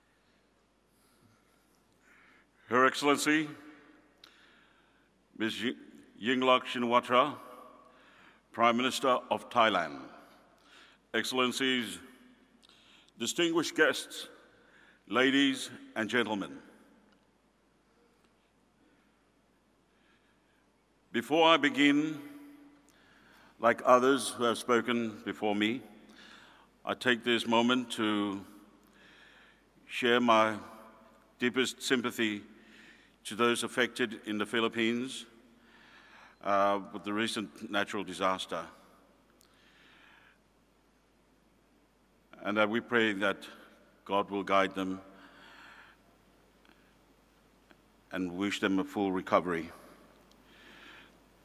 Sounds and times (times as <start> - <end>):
Narration, monologue: 0.0 - 51.4
Male speech, man speaking: 2.7 - 3.7, 5.4 - 7.6, 8.6 - 10.2, 11.2 - 12.1, 13.2 - 14.4, 15.1 - 16.7, 21.1 - 22.4, 23.6 - 25.9, 26.9 - 28.6, 29.9 - 30.8, 31.4 - 32.5, 33.3 - 35.3, 36.4 - 38.8, 42.4 - 45.1, 48.1 - 49.9.